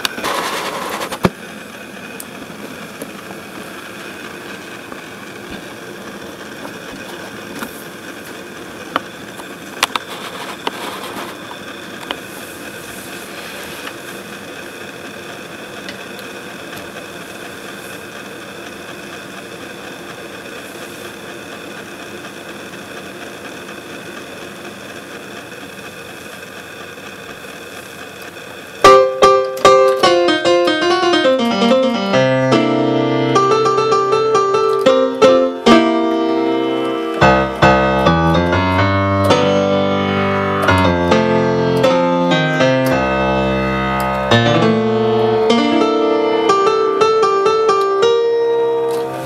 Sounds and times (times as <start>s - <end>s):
Sampler: 28.8s - 49.2s.